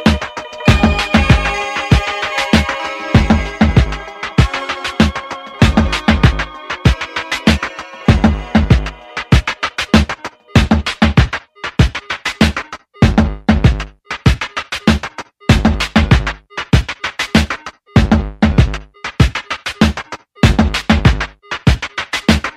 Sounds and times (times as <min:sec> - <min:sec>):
Music: 0:00.0 - 0:22.5.